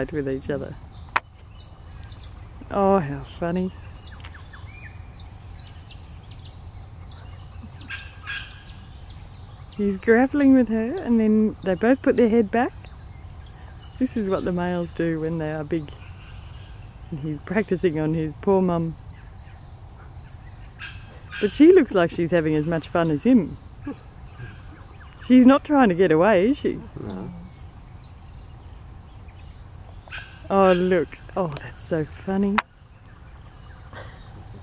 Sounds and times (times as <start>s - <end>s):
Speech: 9.8s - 12.7s, 14.0s - 15.9s, 17.2s - 19.0s, 25.3s - 27.5s, 30.5s - 32.6s.